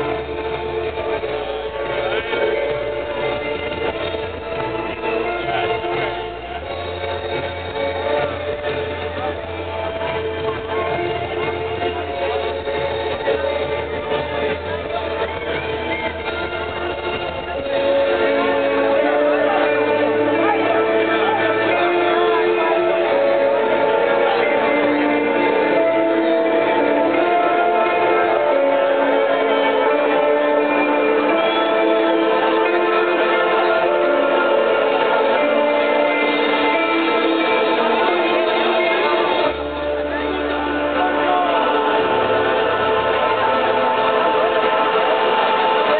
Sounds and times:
Music: 0.0s - 45.9s.

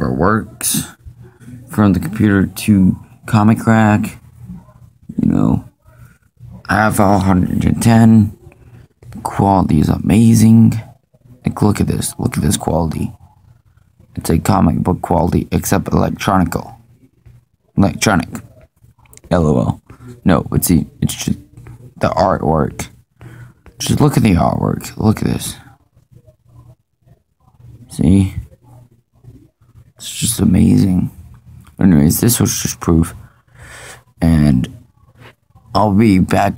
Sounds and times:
Speech: 0.0s - 36.5s.

